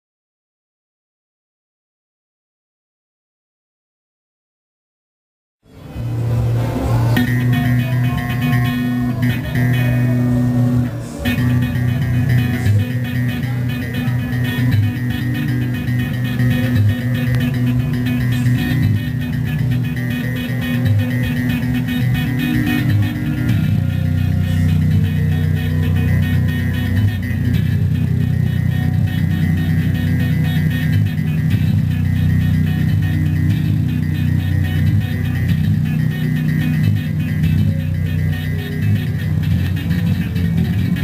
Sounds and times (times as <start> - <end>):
Techno: 5.7 - 41.0.